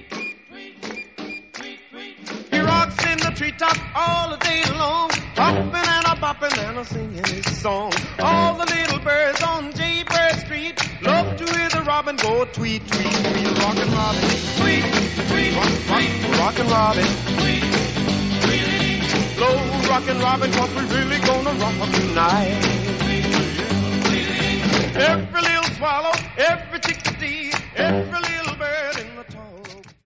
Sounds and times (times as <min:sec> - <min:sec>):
Music: 0:00.0 - 0:30.0.